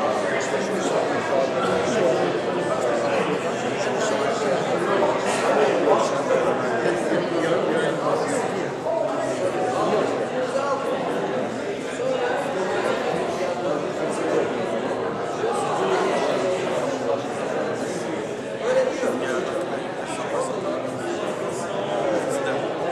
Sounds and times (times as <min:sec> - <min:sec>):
Speech: 0:00.0 - 0:22.9.